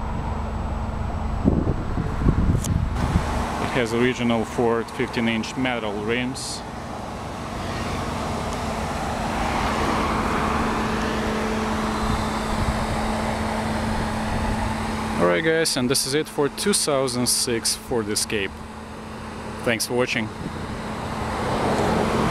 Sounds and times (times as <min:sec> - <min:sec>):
Car: 0:00.0 - 0:22.3
Outside, urban or manmade: 0:00.0 - 0:22.3
Speech: 0:03.6 - 0:06.6, 0:15.2 - 0:18.5, 0:19.6 - 0:20.4.